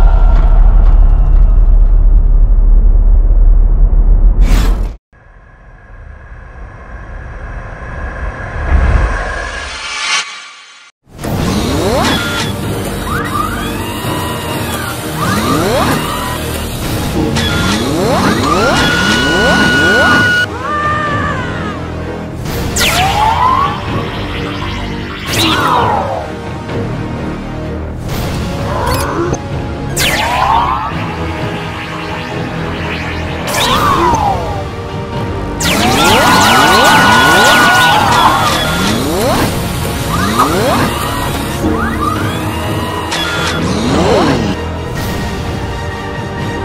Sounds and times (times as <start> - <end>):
Music: 0.0 - 4.1, 11.0 - 46.6.